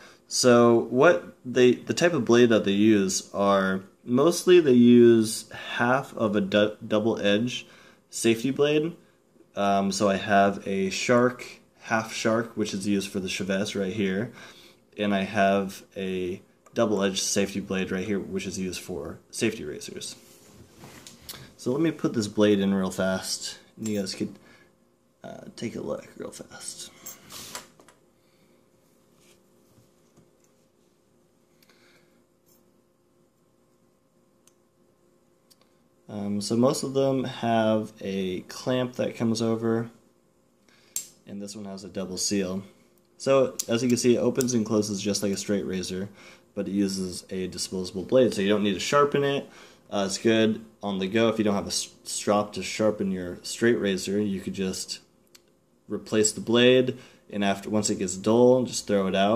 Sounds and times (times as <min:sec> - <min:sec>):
Speech: 0:00.3 - 0:14.4, 0:15.0 - 0:20.2, 0:21.6 - 0:24.4, 0:25.2 - 0:27.0, 0:36.1 - 0:40.0, 0:41.3 - 0:55.1, 0:55.9 - 0:59.3.